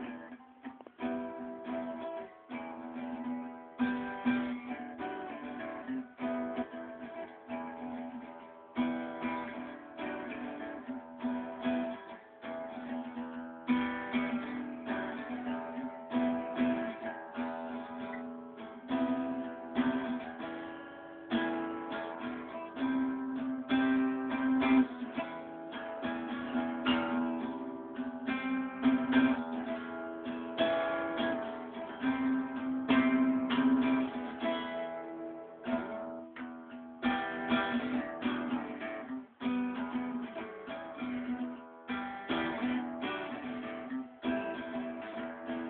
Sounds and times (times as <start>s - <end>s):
Acoustic guitar: 0.0s - 45.6s
Strum: 0.0s - 45.6s.